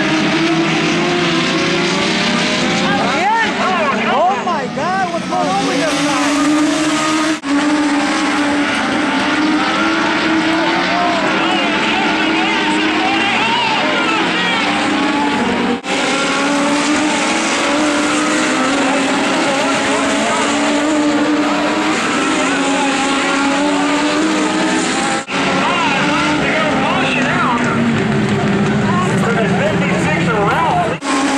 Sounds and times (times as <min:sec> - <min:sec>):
Car: 0:00.0 - 0:31.3.